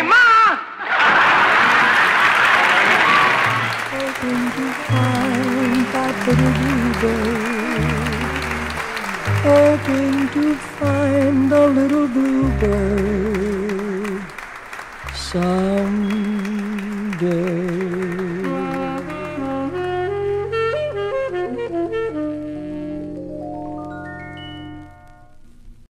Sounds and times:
Music: 0:03.3 - 0:25.9.

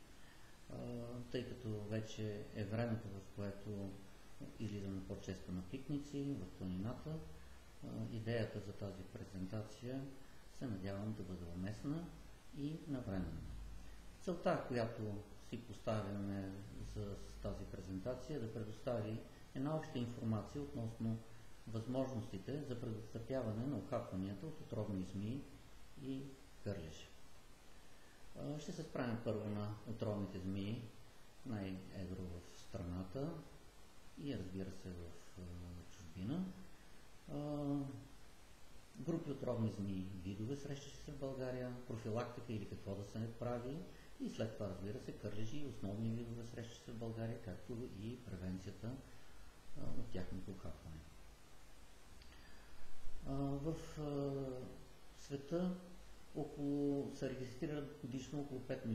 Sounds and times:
Male speech, man speaking: 0:00.7 - 0:27.2, 0:28.4 - 0:33.6, 0:34.2 - 0:36.6, 0:37.3 - 0:38.1, 0:39.0 - 0:49.1, 0:49.8 - 0:51.1, 0:53.2 - 0:58.9.

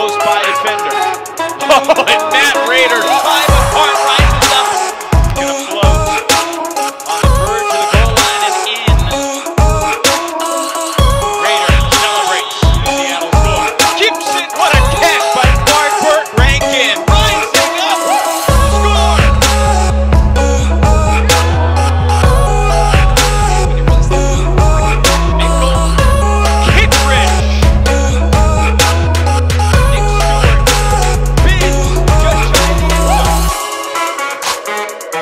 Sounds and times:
Music: 0:00.0 - 0:35.2.

